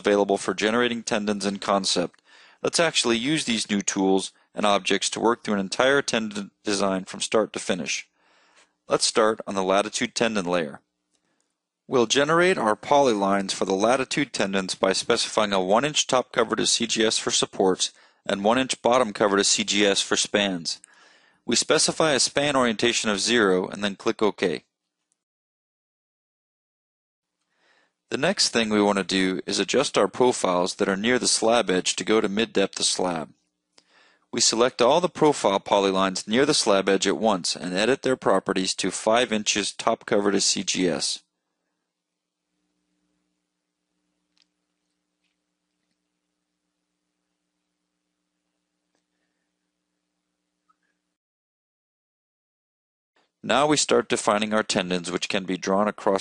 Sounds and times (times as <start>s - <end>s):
Speech: 0.0s - 8.1s, 8.9s - 10.8s, 11.9s - 20.9s, 21.5s - 24.7s, 28.1s - 33.4s, 34.4s - 41.3s, 53.4s - 56.2s.